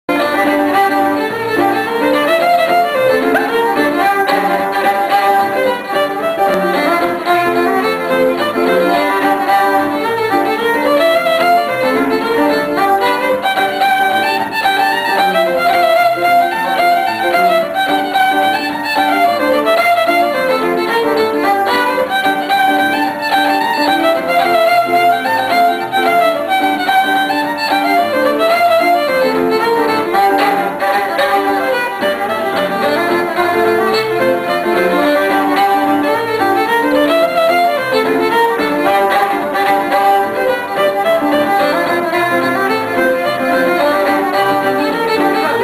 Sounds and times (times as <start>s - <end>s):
Music: 0.0s - 45.6s.